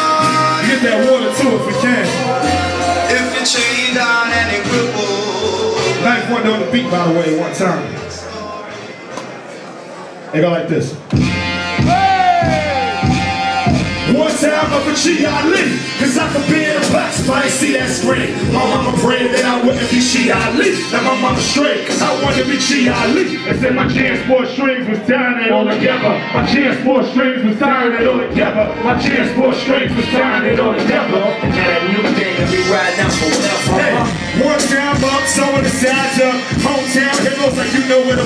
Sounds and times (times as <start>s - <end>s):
Music: 0.0s - 9.7s, 11.0s - 38.2s
Speech: 6.0s - 8.2s, 10.3s - 11.0s.